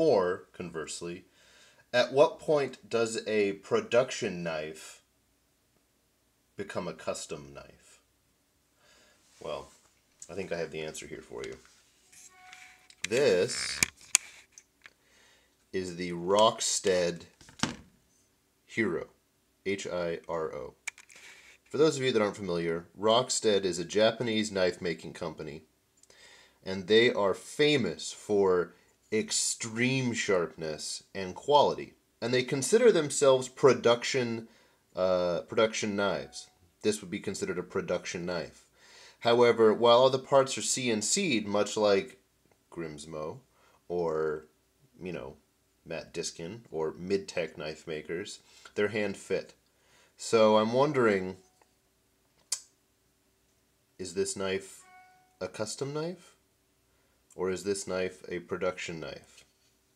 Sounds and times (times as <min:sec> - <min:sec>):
Speech: 0:00.0 - 0:01.3, 0:01.9 - 0:05.1, 0:06.6 - 0:08.0, 0:09.4 - 0:11.6, 0:13.0 - 0:13.8, 0:15.8 - 0:17.3, 0:18.7 - 0:20.8, 0:21.7 - 0:25.7, 0:26.6 - 0:38.6, 0:39.2 - 0:49.6, 0:50.2 - 0:51.4, 0:54.0 - 0:54.8, 0:55.4 - 0:56.4, 0:57.4 - 0:59.4
Inside, small room: 0:00.0 - 0:59.9.